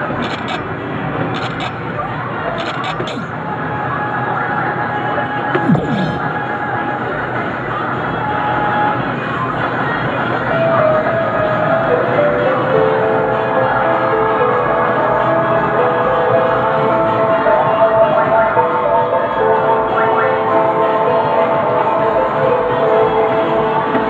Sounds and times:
Music: 4.1s - 24.1s.

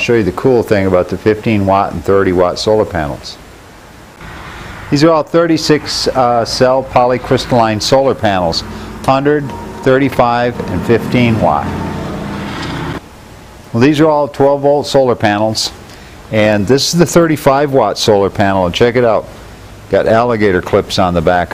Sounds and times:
Speech: 0.0s - 3.4s, 5.0s - 11.8s, 13.7s - 19.3s, 19.9s - 21.5s.

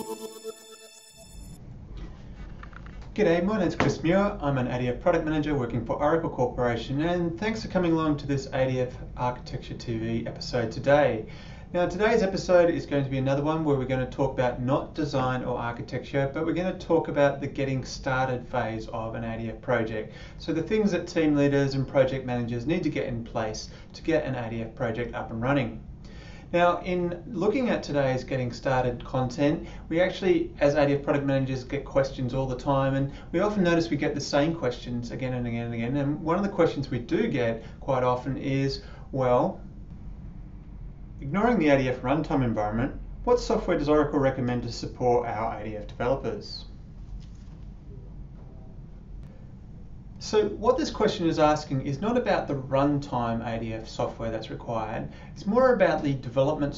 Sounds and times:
Speech: 3.2s - 25.8s, 26.5s - 39.6s, 41.2s - 46.7s, 50.2s - 56.7s.

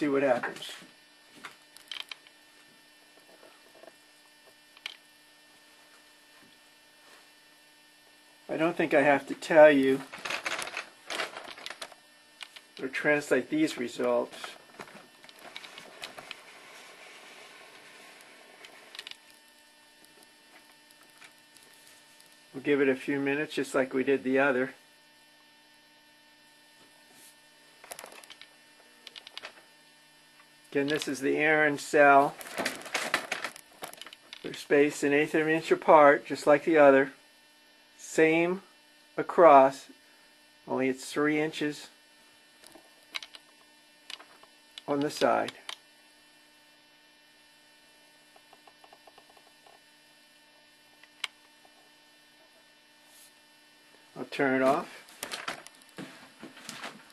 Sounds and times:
Speech: 0.0s - 0.9s, 8.5s - 10.1s, 12.8s - 14.6s, 22.6s - 24.8s, 30.7s - 32.4s, 34.4s - 37.2s, 38.0s - 40.0s, 40.7s - 42.0s, 44.9s - 45.7s, 54.2s - 55.0s.

